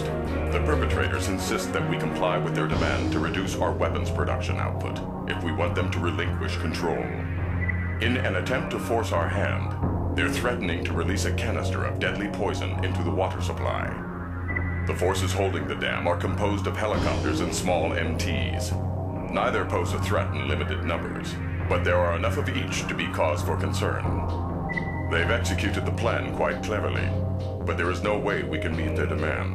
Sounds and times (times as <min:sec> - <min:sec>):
Speech: 0:00.0 - 0:07.2, 0:08.0 - 0:14.0, 0:14.9 - 0:24.2, 0:25.1 - 0:29.5
Music: 0:00.0 - 0:29.5.